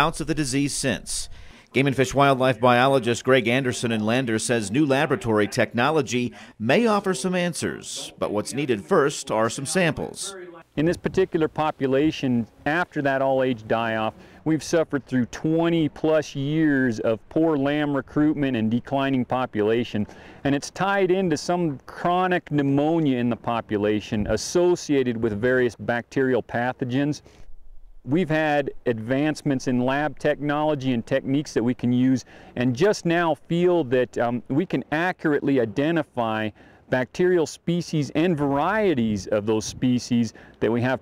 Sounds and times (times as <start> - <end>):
Speech: 0.0 - 27.2, 28.1 - 41.0.